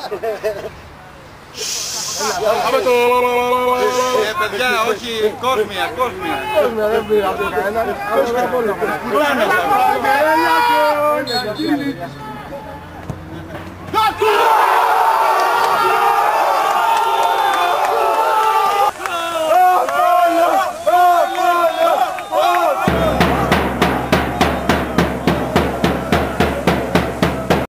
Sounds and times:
Music: 22.9 - 27.6.

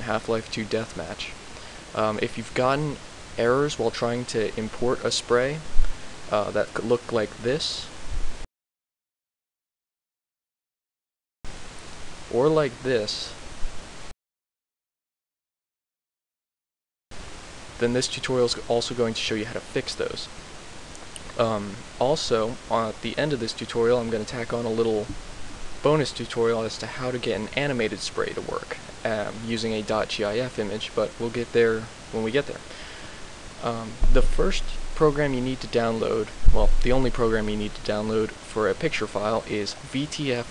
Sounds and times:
Speech: 0.0 - 1.4, 2.0 - 5.7, 6.3 - 8.0, 12.3 - 13.4, 17.8 - 20.4, 21.3 - 25.2, 25.8 - 32.7, 33.6 - 40.5.

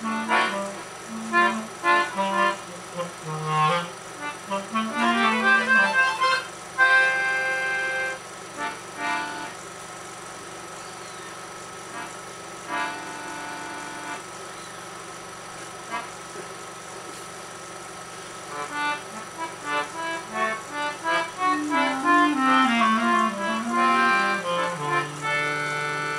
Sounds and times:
Clarinet: 0.0 - 8.2, 18.8 - 26.1.

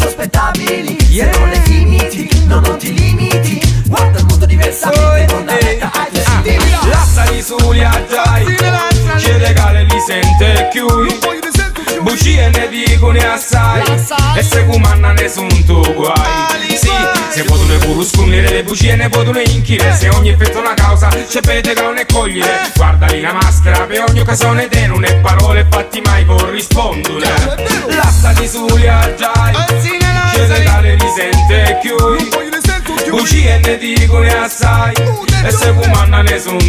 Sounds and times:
Music: 0.0 - 36.6.

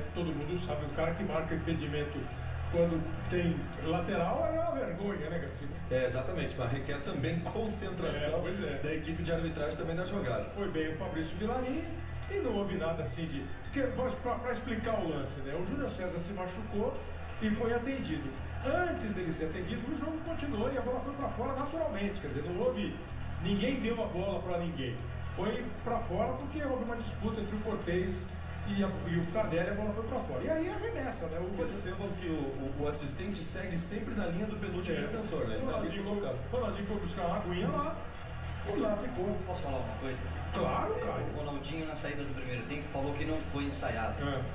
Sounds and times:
Music: 0.0 - 44.5
Speech: 0.0 - 44.5.

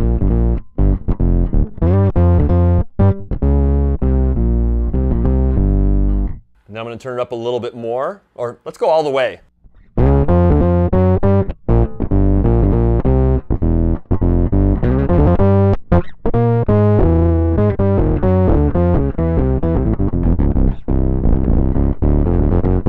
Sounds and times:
Bass guitar: 0.0 - 6.7, 9.5 - 22.8
Distortion: 0.0 - 22.8.

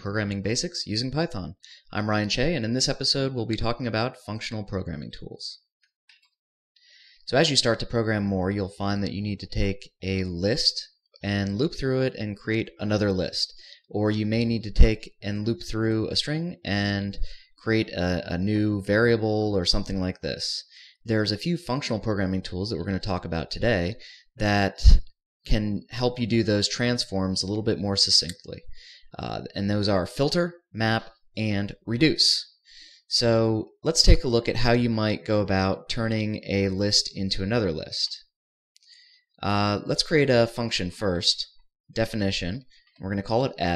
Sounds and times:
Speech: 0.0 - 5.7, 7.2 - 38.3, 39.4 - 43.7.

